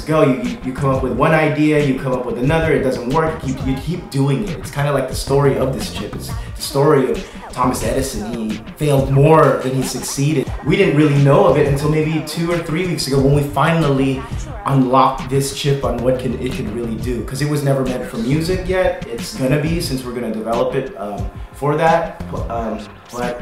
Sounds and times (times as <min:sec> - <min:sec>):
Music: 0:00.0 - 0:23.4
Speech: 0:00.0 - 0:23.4.